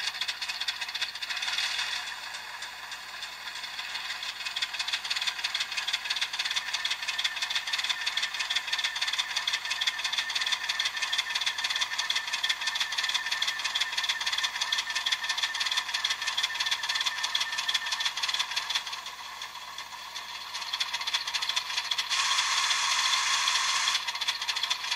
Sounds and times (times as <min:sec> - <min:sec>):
Clatter: 0:00.0 - 0:24.9.